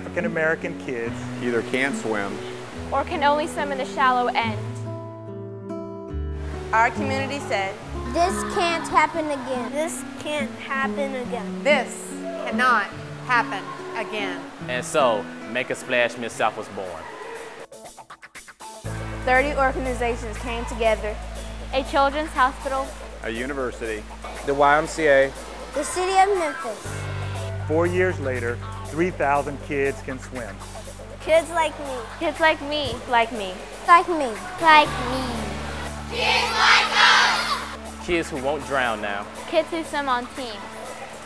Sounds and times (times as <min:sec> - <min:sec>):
Music: 0:00.0 - 0:41.2.